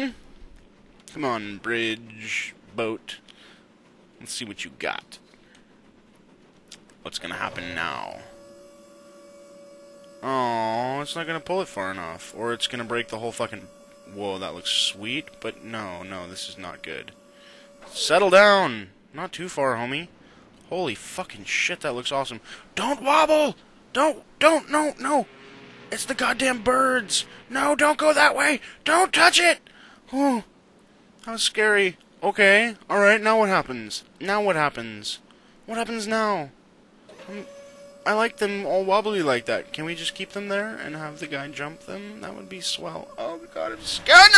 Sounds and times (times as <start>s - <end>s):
Hum: 0.0s - 28.8s, 35.2s - 44.3s.